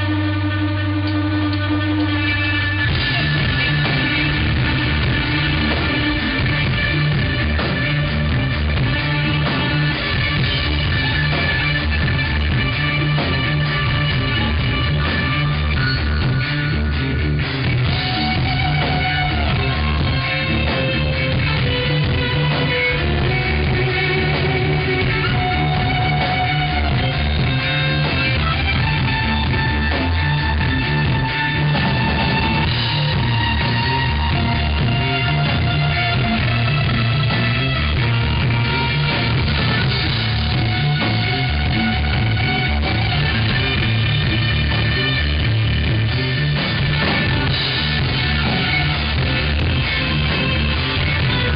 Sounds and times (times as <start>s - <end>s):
Violin, fiddle: 17.6s - 51.5s.